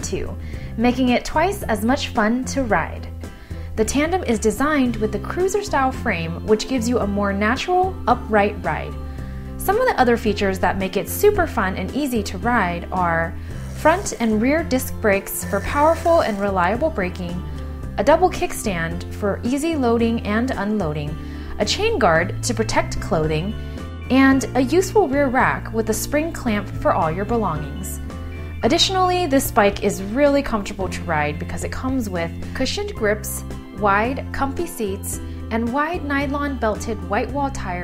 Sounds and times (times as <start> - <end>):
Speech: 0.0 - 3.1, 3.8 - 9.0, 9.6 - 17.4, 18.0 - 28.0, 28.6 - 37.8
Music: 0.0 - 37.8.